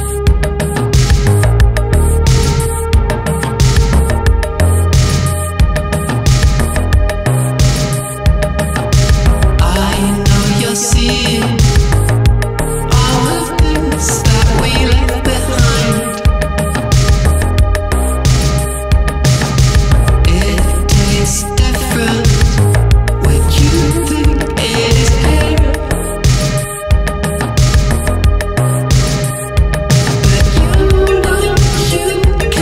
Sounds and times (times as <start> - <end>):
Electronica: 0.0 - 32.6.